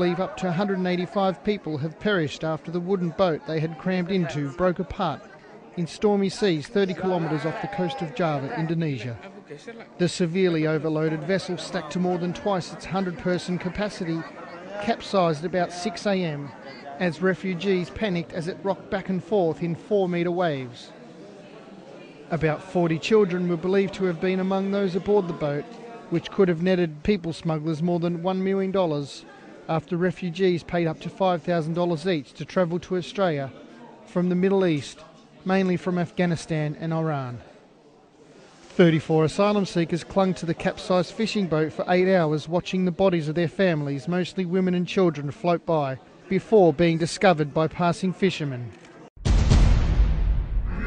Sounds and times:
Speech: 0.0 - 37.7, 38.7 - 49.1.

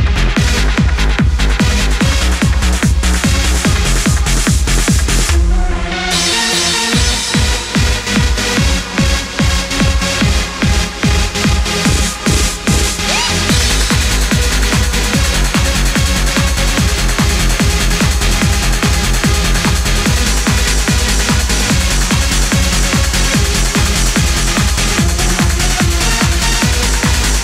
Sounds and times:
Techno: 0.0 - 27.4.

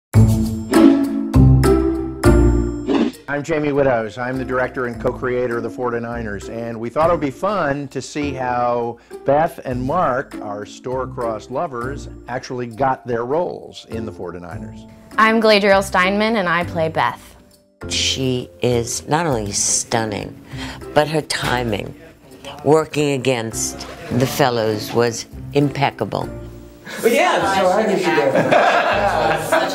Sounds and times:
Music: 0.1 - 29.7.

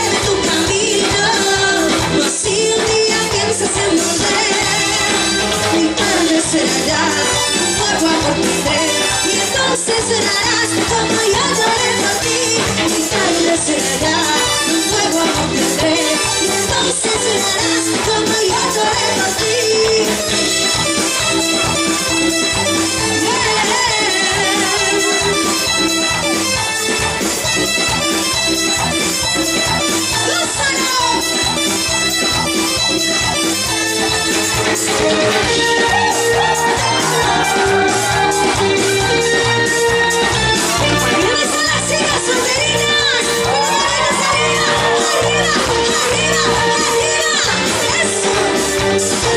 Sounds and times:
Music: 0.0 - 49.3.

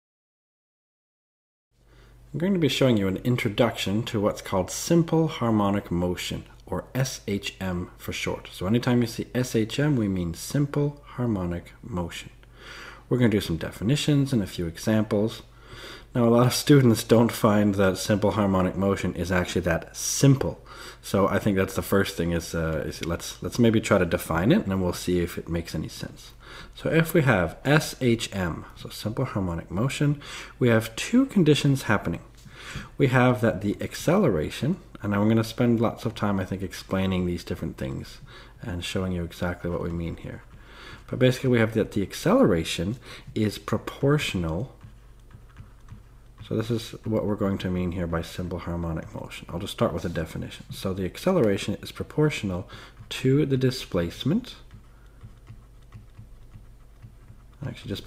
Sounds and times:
Speech: 2.3 - 12.4, 13.1 - 15.5, 16.1 - 32.3, 32.9 - 40.5, 41.1 - 44.9, 46.4 - 54.7, 57.6 - 58.0.

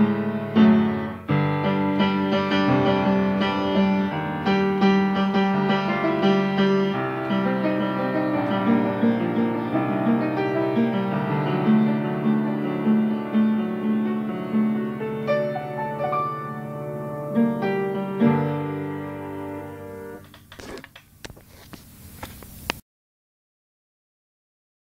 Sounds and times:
Piano: 0.0 - 21.2.

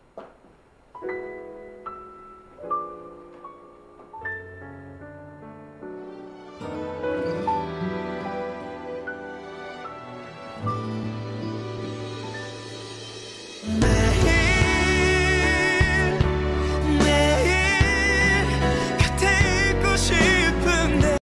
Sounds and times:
Music: 0.9 - 21.2.

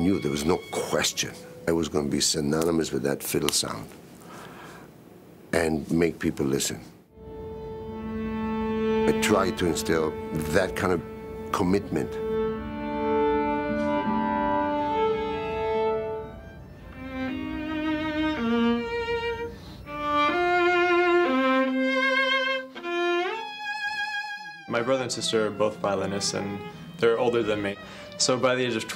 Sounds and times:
Violin, fiddle: 0.0 - 1.8, 7.2 - 28.9
Speech: 0.0 - 3.9, 5.5 - 6.9, 9.1 - 12.2, 24.7 - 28.9.

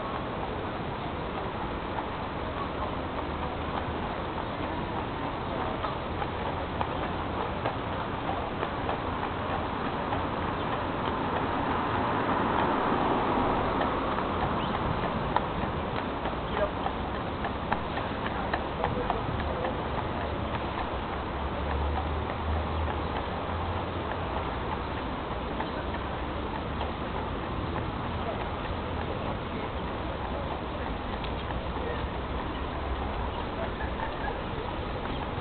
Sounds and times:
Clip-clop: 0.0 - 35.4.

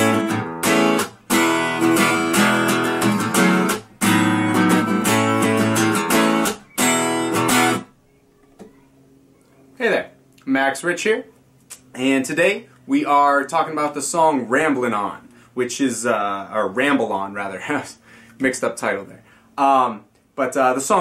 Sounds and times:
Strum: 0.0 - 7.9
Acoustic guitar: 0.0 - 8.9
Speech: 8.1 - 11.3, 11.9 - 21.0.

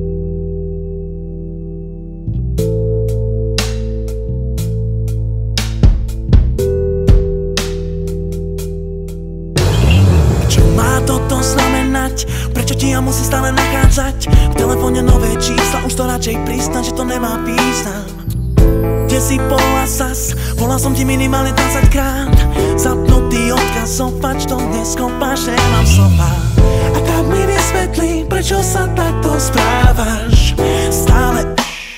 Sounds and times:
Music: 0.0 - 31.9.

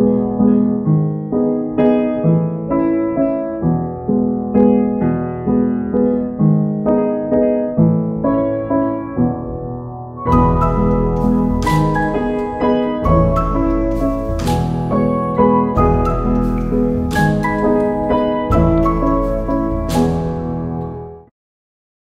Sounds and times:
Music: 0.0 - 21.3.

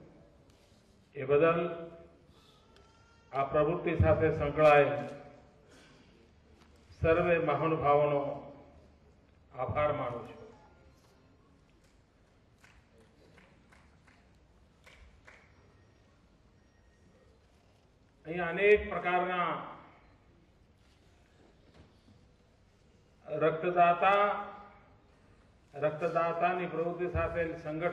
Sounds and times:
Narration, monologue: 0.0 - 2.3, 3.2 - 5.9, 6.6 - 10.5, 18.2 - 20.1, 23.2 - 27.9
Male speech, man speaking: 1.2 - 2.0, 3.4 - 5.3, 7.0 - 8.6, 9.5 - 10.6, 18.2 - 19.9, 23.3 - 24.8, 25.8 - 27.9.

